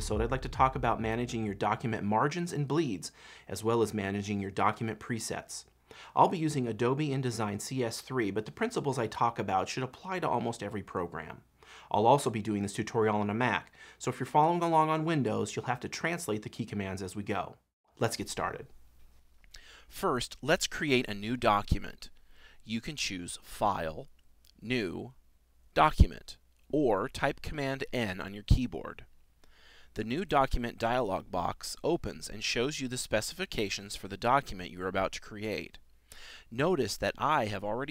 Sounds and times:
Speech: 0.0 - 18.7, 19.9 - 25.2, 25.8 - 29.1, 30.0 - 35.8, 36.5 - 37.9.

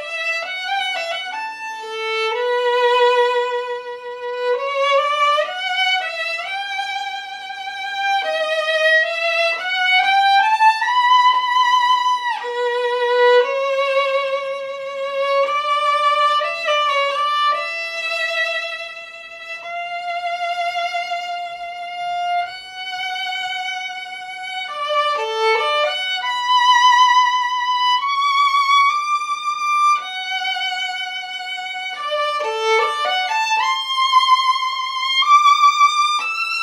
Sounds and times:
Violin, fiddle: 0.0 - 36.6.

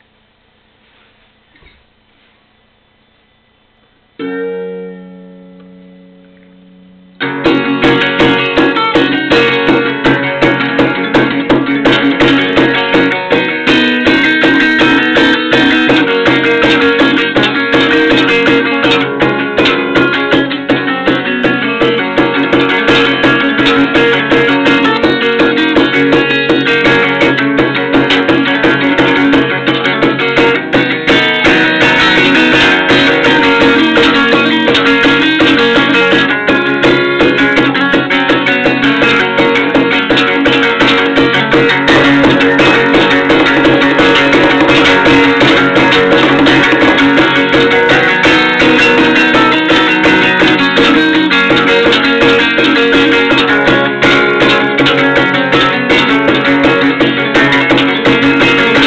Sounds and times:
Strum: 0.8 - 58.8
Acoustic guitar: 4.1 - 58.8.

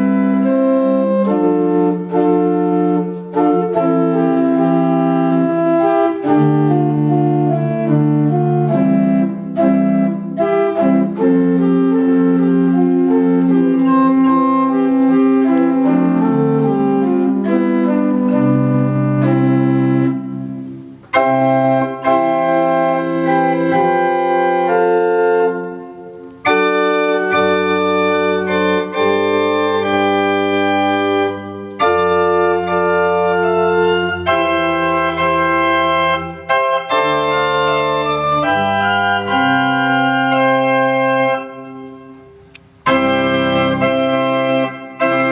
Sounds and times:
Organ: 0.0 - 45.3
Piano: 0.0 - 45.3.

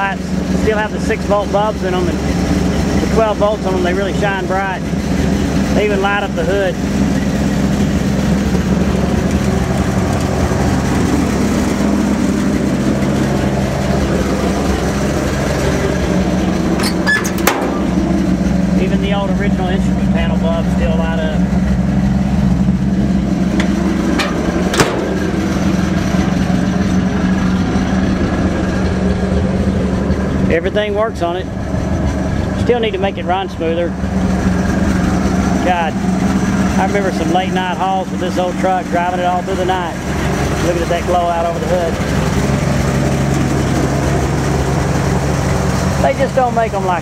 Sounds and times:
Speech: 0.0 - 2.2, 3.0 - 4.9, 5.7 - 6.8, 18.8 - 21.5, 30.5 - 31.5, 32.6 - 34.0, 35.6 - 36.0, 36.8 - 40.0, 40.6 - 42.0, 46.0 - 47.0
Vehicle: 0.0 - 47.0.

